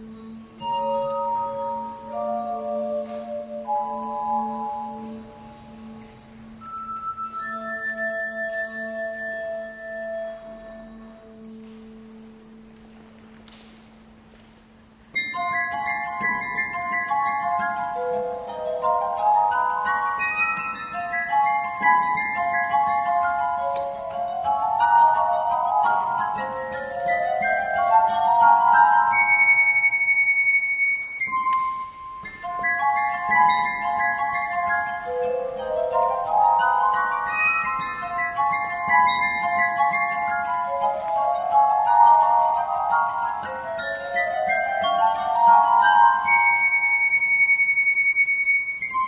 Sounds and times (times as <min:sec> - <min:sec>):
Glass: 0:00.0 - 0:49.0
Musical instrument: 0:00.0 - 0:49.0.